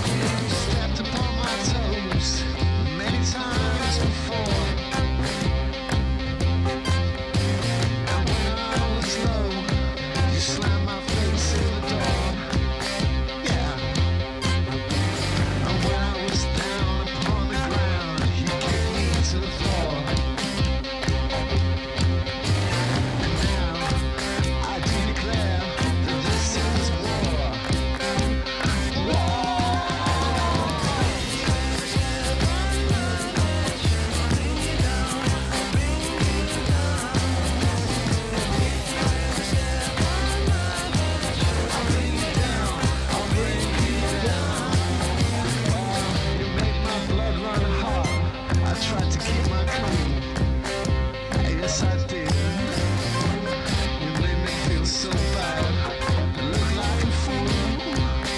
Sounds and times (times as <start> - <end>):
Music: 0.0 - 58.3.